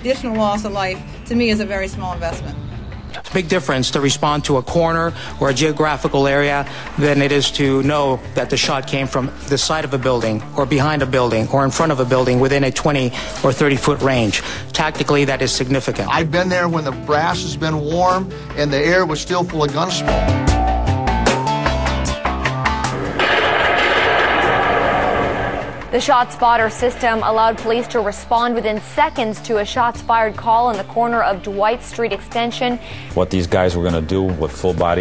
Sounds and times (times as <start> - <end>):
Music: 0.0 - 35.0.